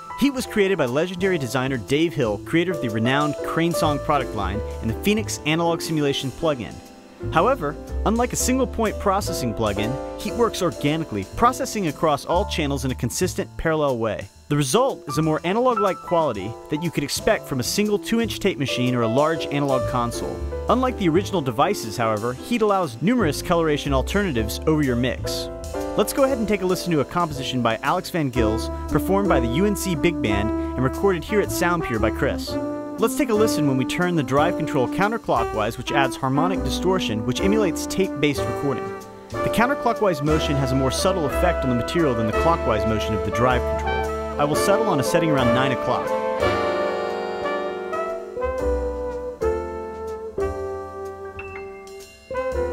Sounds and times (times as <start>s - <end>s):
Music: 0.0s - 52.7s
Speech: 0.2s - 46.2s.